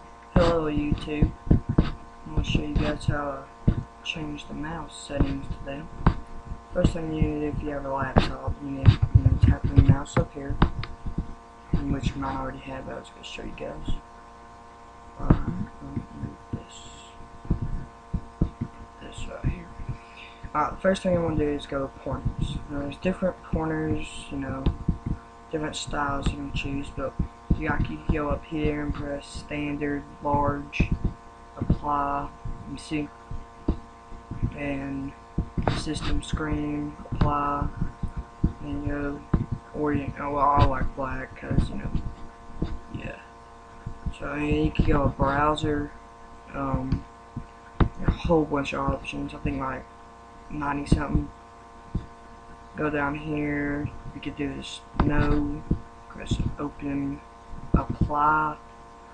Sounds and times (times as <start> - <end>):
Speech: 0.3 - 14.1, 15.2 - 42.2, 42.9 - 43.3, 44.0 - 47.1, 47.8 - 49.9, 50.5 - 51.4, 52.8 - 58.6.